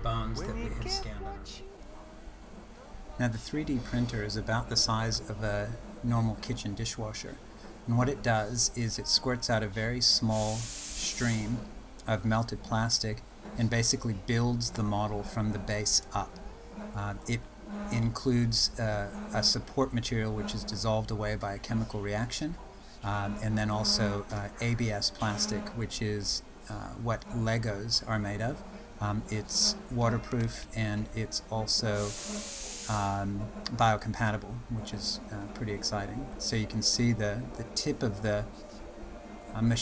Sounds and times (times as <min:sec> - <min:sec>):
Speech: 0:00.0 - 0:01.7, 0:03.2 - 0:16.4, 0:17.0 - 0:32.2, 0:32.9 - 0:38.6, 0:39.6 - 0:39.8.